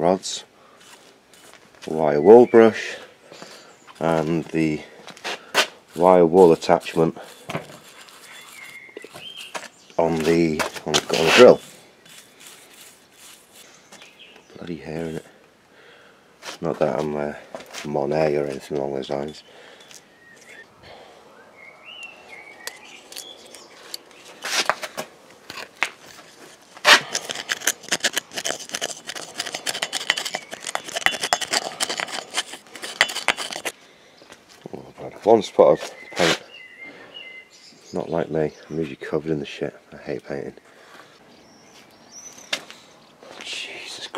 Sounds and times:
Speech: 0.0 - 0.5, 1.9 - 3.0, 4.0 - 4.9, 6.0 - 7.2, 10.0 - 11.6, 14.6 - 15.3, 16.6 - 19.4, 34.6 - 36.4, 37.9 - 40.6, 43.4 - 44.1.

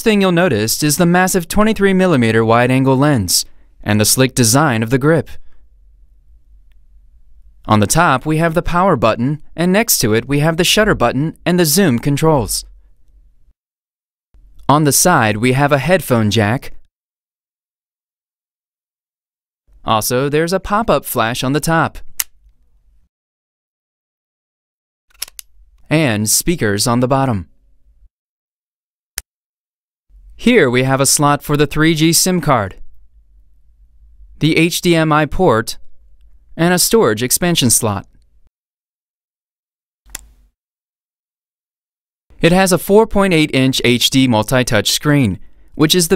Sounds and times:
Speech: 0.0 - 5.4, 7.7 - 12.7, 14.7 - 16.8, 19.8 - 22.1, 25.9 - 27.5, 30.4 - 32.9, 34.4 - 35.8, 36.6 - 38.2, 42.4 - 46.1.

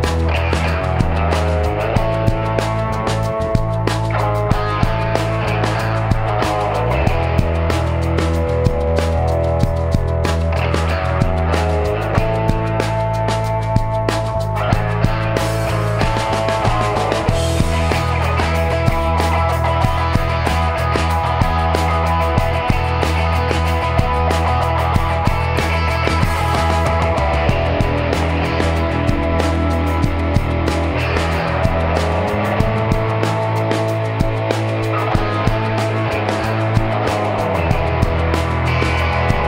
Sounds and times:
Music: 0.0 - 39.4.

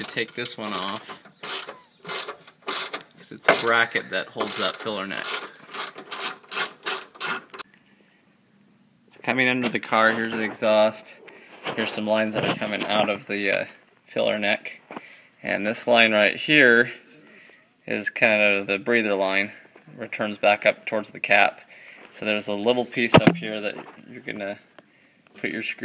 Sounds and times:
Speech: 0.0 - 1.0, 3.2 - 5.3, 9.2 - 11.2, 11.8 - 14.8, 15.4 - 17.0, 17.9 - 24.7, 25.4 - 25.8
Outside, urban or manmade: 0.0 - 25.8.

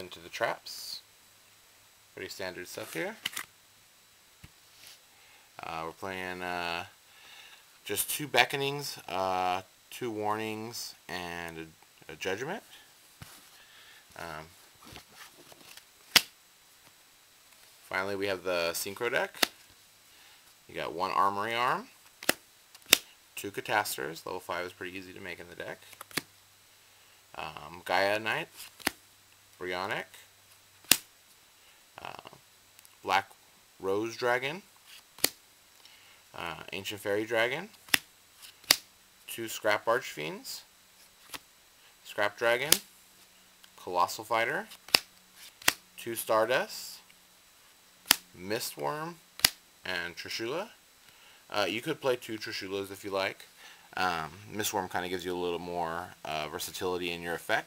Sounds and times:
Speech: 0.0 - 1.1, 2.2 - 3.2, 5.6 - 7.0, 7.8 - 12.8, 14.2 - 14.6, 17.9 - 19.4, 20.7 - 22.0, 23.4 - 25.9, 27.3 - 28.6, 29.6 - 30.3, 32.0 - 32.4, 33.0 - 34.7, 36.3 - 37.8, 39.3 - 40.7, 42.0 - 42.9, 43.8 - 44.7, 46.0 - 47.1, 48.3 - 49.2, 49.8 - 50.8, 51.5 - 57.6
Inside, small room: 0.0 - 57.6.

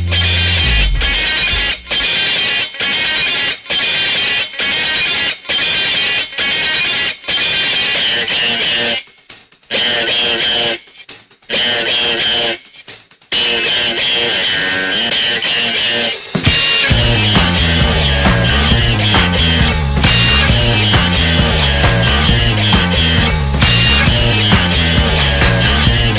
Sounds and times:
Music: 0.0 - 26.1.

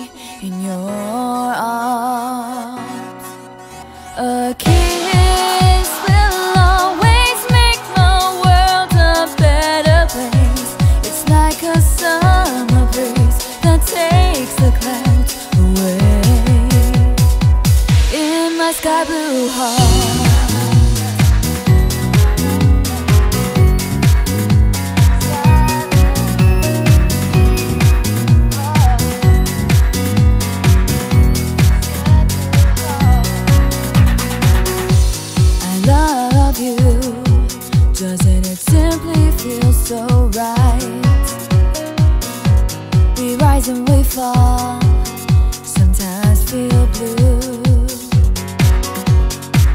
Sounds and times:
Music: 0.0 - 49.7.

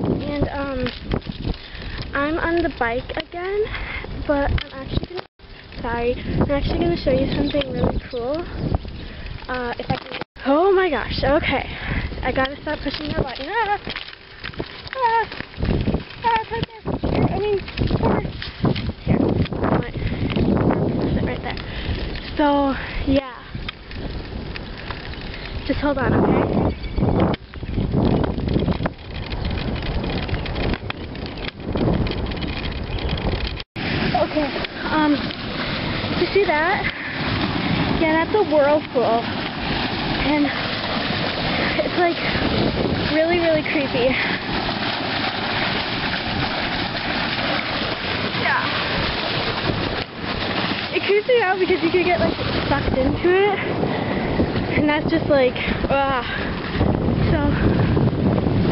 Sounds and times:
Speech: 0.2 - 0.9, 5.8 - 8.5, 9.5 - 13.8, 22.4 - 23.5, 34.2 - 35.2, 38.0 - 39.2, 40.2 - 40.6, 43.1 - 44.2, 51.0 - 53.7, 54.8 - 56.4, 57.3 - 57.6.

